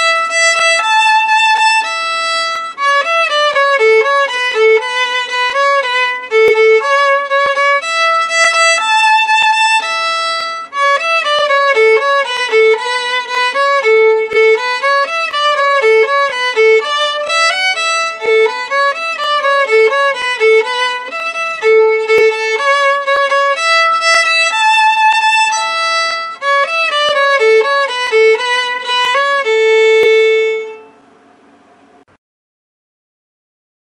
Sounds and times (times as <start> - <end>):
Violin, fiddle: 0.0 - 31.0.